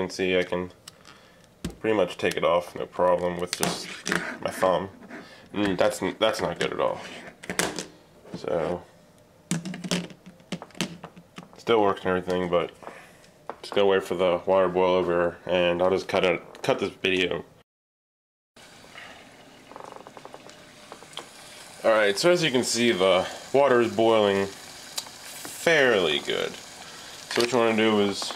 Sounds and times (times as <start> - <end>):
Sizzle: 18.6 - 28.3.